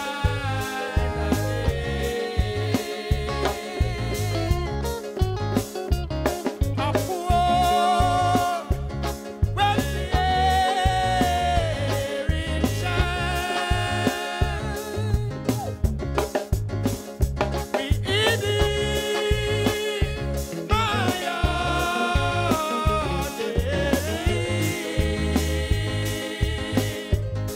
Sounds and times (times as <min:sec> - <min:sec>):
Music: 0:00.0 - 0:27.5.